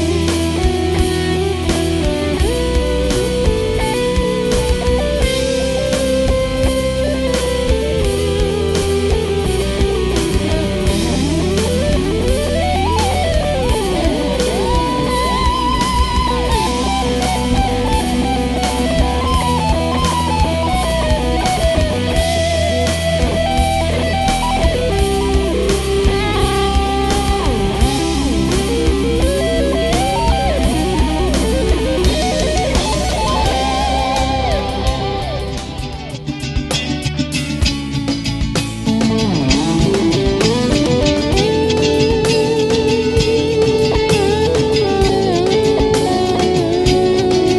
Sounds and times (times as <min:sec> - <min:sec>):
Electric guitar: 0:00.0 - 0:47.5.